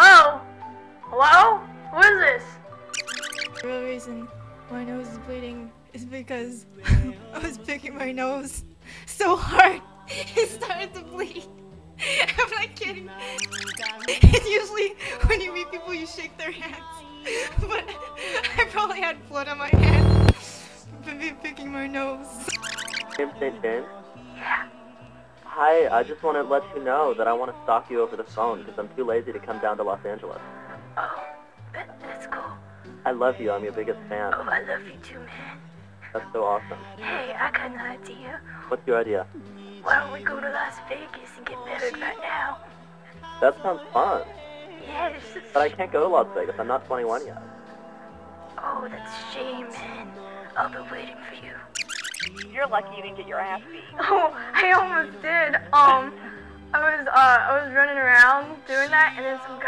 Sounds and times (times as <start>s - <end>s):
Music: 0.0s - 59.6s
Speech: 1.1s - 2.5s, 3.6s - 24.7s, 25.5s - 30.4s, 31.8s - 35.6s, 36.2s - 42.2s, 43.4s - 47.4s, 48.6s - 50.0s, 52.4s - 59.6s.